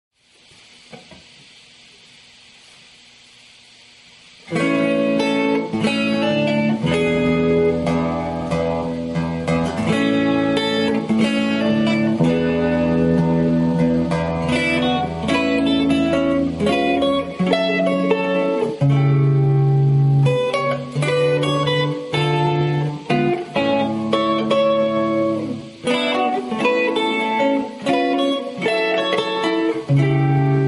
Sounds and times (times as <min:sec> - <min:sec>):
Inside, small room: 0:00.1 - 0:30.6
Guitar: 0:00.2 - 0:30.6.